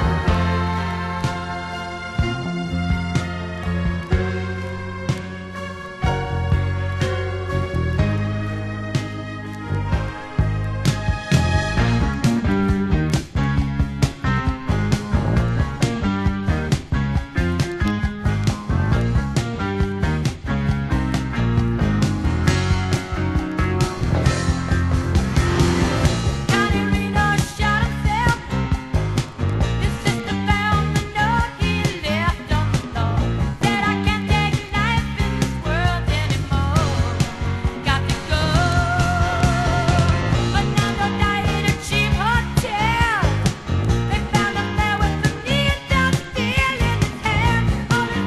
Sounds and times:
Rock and roll: 0.0s - 48.2s.

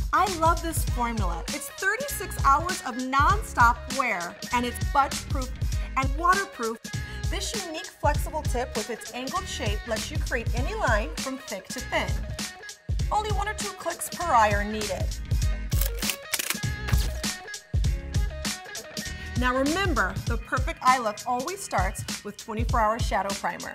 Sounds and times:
Music: 0.0s - 23.7s
Speech: 0.2s - 12.2s, 13.1s - 15.1s, 19.4s - 23.7s.

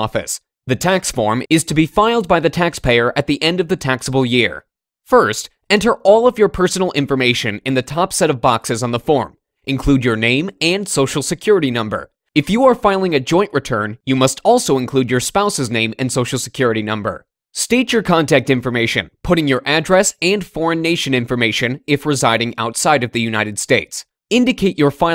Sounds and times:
Speech: 0.0s - 25.1s.

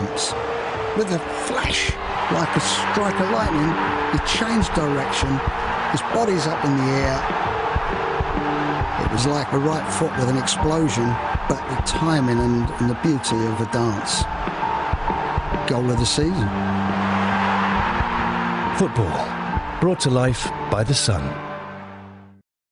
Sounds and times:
Music: 0.0s - 22.4s
Speech: 1.0s - 5.4s, 6.0s - 7.2s, 9.0s - 14.3s, 15.7s - 16.5s, 18.8s - 21.4s.

